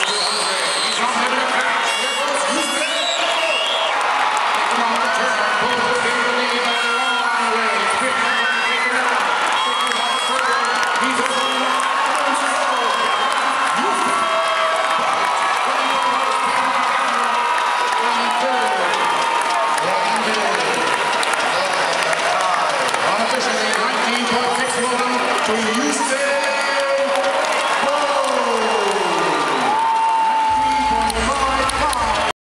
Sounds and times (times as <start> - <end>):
Speech: 0.0 - 3.8, 4.6 - 14.4, 15.6 - 29.6, 30.5 - 32.3.